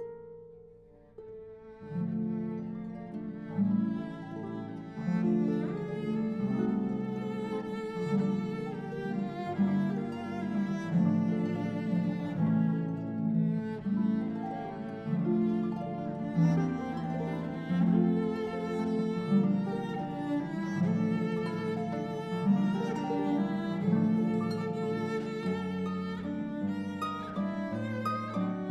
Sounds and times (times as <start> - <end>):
Cello: 0.0 - 28.7
Classical music: 0.0 - 28.7
Harp: 0.0 - 28.7.